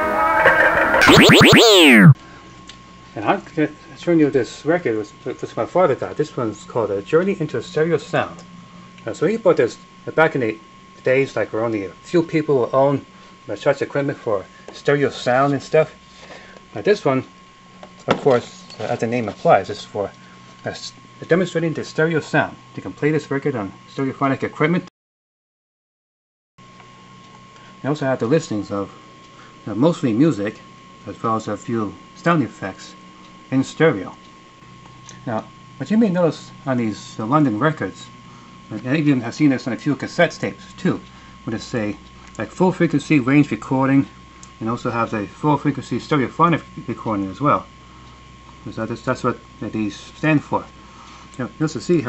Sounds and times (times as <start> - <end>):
Speech: 0.0 - 2.2, 3.2 - 8.4, 9.0 - 16.0, 16.8 - 17.3, 18.1 - 24.9, 27.8 - 29.0, 29.7 - 34.2, 35.2 - 38.1, 38.7 - 47.7, 48.6 - 50.7, 51.4 - 52.0.